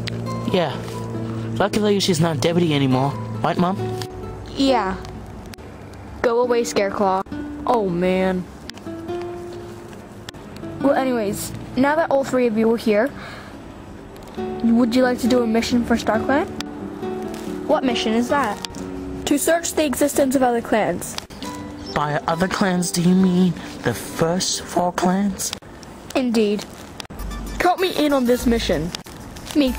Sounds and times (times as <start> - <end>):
Music: 0.0 - 25.0, 27.1 - 29.7.